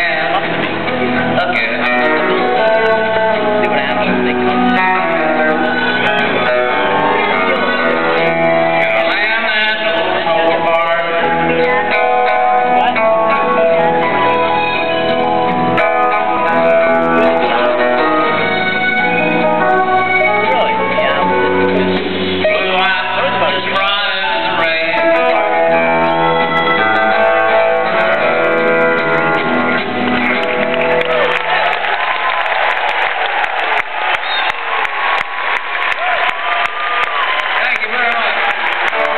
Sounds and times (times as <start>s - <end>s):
Music: 0.0s - 39.1s.